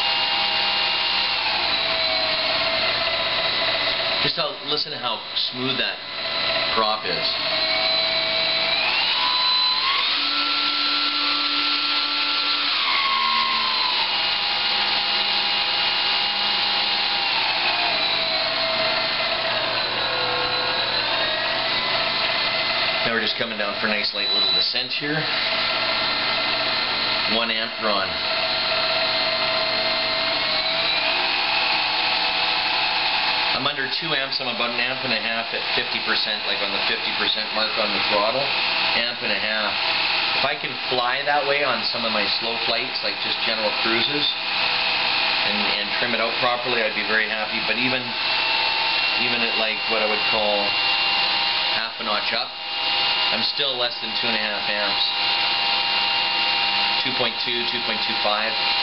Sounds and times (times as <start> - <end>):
Speech: 4.2 - 6.0, 6.7 - 7.4, 23.0 - 25.3, 27.3 - 28.2, 33.6 - 39.8, 40.4 - 44.4, 45.4 - 48.2, 49.2 - 50.8, 51.8 - 52.6, 53.3 - 55.2, 56.9 - 58.6.